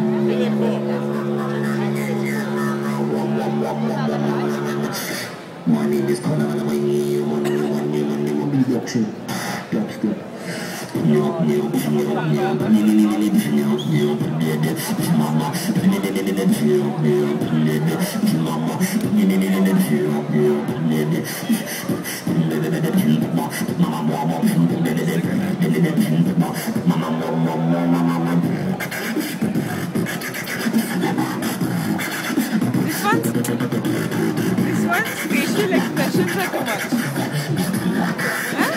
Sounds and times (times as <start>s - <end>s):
Speech: 0.0s - 10.3s, 11.0s - 28.6s, 32.7s - 33.9s, 34.6s - 38.7s.